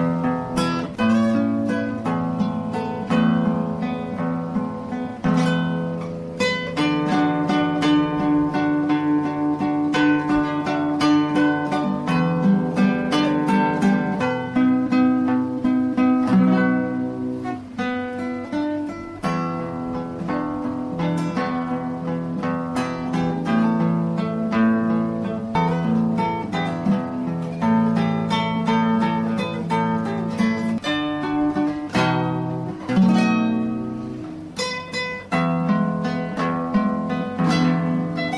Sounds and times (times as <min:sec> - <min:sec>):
Acoustic guitar: 0:00.0 - 0:38.3
Strum: 0:00.0 - 0:38.3.